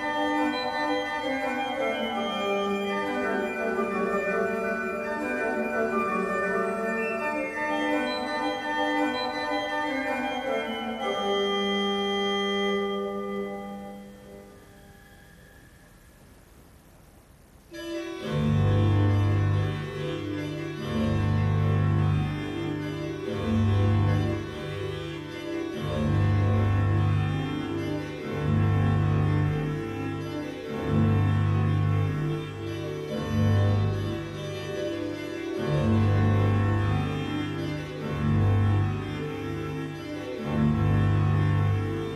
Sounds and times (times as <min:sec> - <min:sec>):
Keyboard (musical): 0:00.0 - 0:16.0, 0:17.7 - 0:42.1.